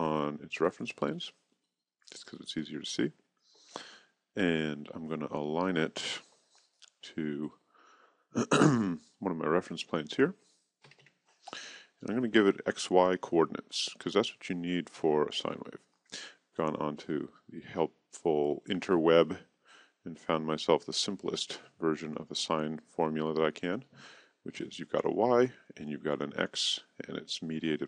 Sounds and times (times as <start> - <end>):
Speech: 0.0 - 1.4, 2.1 - 3.2, 3.8 - 7.6, 8.4 - 10.4, 11.6 - 27.8.